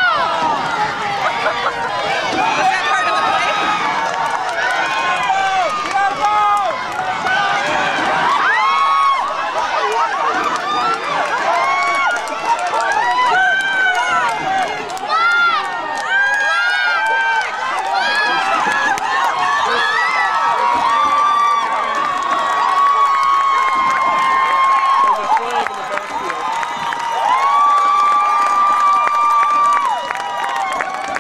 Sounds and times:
Speech: 25.0s - 26.4s.

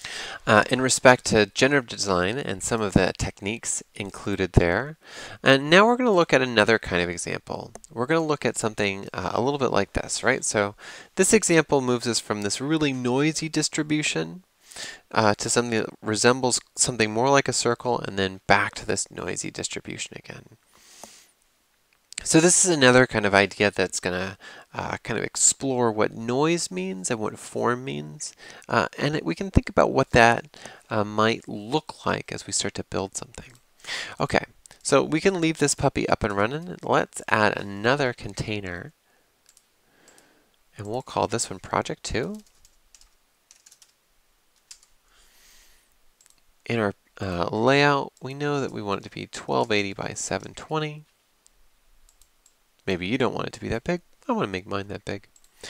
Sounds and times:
Speech: 0.4s - 14.4s, 15.1s - 20.6s, 22.2s - 39.0s, 40.8s - 42.5s, 46.7s - 51.1s, 52.8s - 55.3s.

